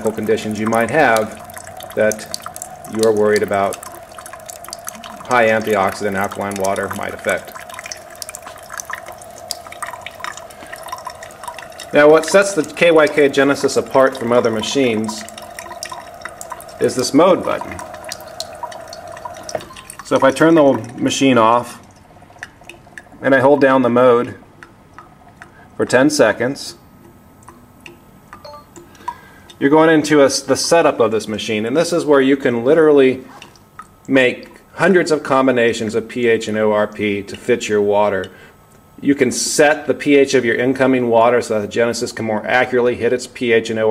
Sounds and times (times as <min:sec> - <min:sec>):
Speech: 0:00.0 - 0:01.4, 0:02.0 - 0:02.3, 0:02.9 - 0:03.8, 0:05.3 - 0:07.5, 0:12.0 - 0:15.3, 0:16.8 - 0:17.8, 0:20.1 - 0:21.8, 0:23.2 - 0:24.4, 0:25.8 - 0:26.8, 0:29.6 - 0:33.3, 0:34.1 - 0:38.4, 0:39.0 - 0:43.9
Liquid: 0:00.0 - 0:43.9
Water: 0:00.0 - 0:43.9.